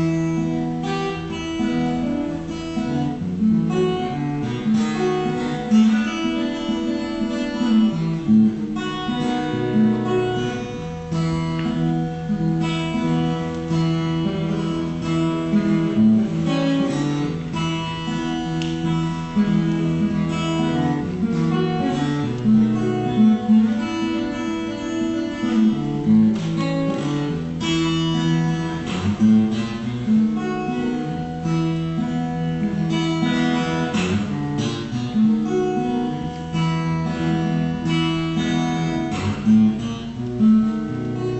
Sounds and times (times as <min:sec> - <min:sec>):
Acoustic guitar: 0:00.0 - 0:41.3
Strum: 0:00.0 - 0:41.3.